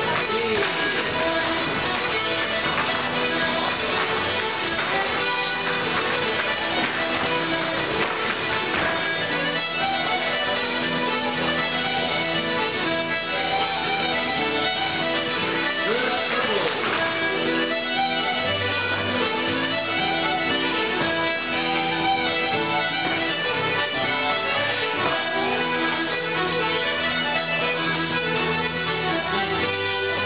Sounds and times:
Traditional music: 0.0s - 30.2s.

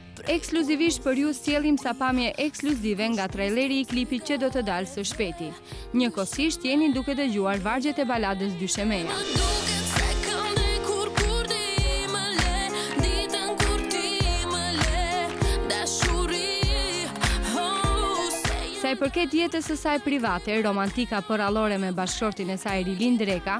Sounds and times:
Music: 0.0s - 23.5s
Speech: 0.2s - 9.3s, 18.8s - 23.5s.

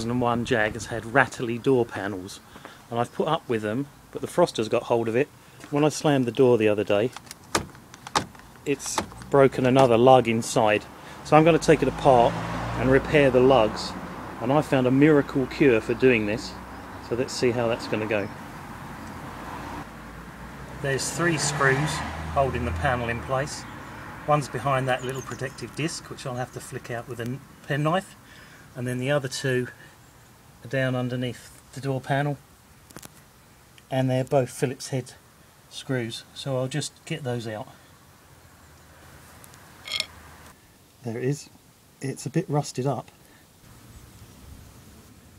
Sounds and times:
Speech: 0.0s - 7.2s, 8.7s - 18.4s, 20.8s - 23.7s, 24.3s - 28.2s, 28.8s - 29.8s, 30.6s - 32.4s, 33.9s - 37.8s, 41.0s - 43.2s
Vehicle: 0.0s - 34.0s, 35.2s - 40.6s, 43.7s - 45.3s.

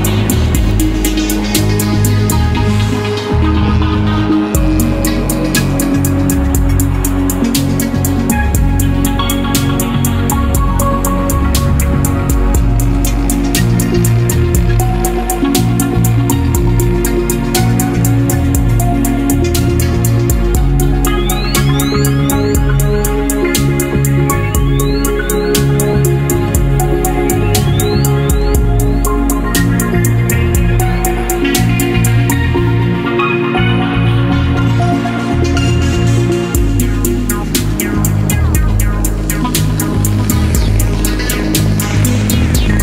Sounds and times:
Synthesizer: 0.0s - 42.8s.

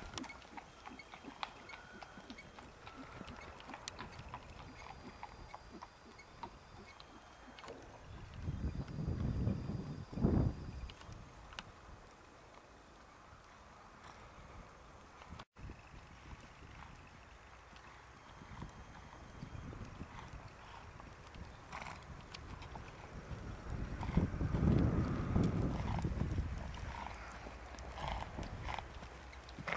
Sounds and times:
Clip-clop: 0.0s - 29.7s.

